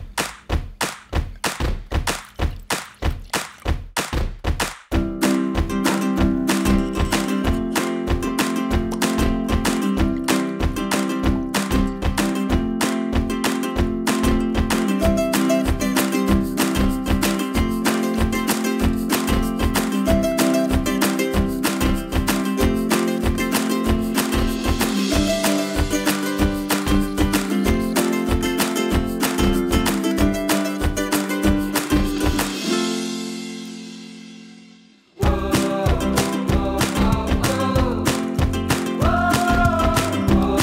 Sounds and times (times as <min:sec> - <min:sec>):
Music: 0:00.0 - 0:40.6.